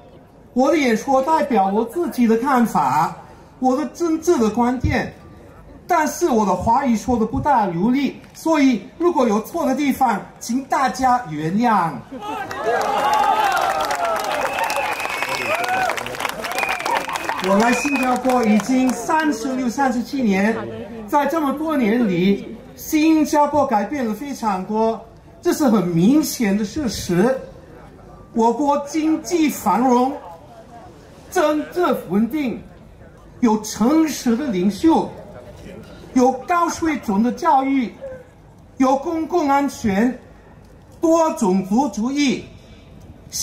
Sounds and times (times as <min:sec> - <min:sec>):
Narration, monologue: 0:00.4 - 0:12.1, 0:17.5 - 0:43.4
Male speech, man speaking: 0:00.5 - 0:05.2, 0:05.9 - 0:12.0, 0:17.4 - 0:38.2, 0:38.8 - 0:40.2, 0:41.0 - 0:42.5.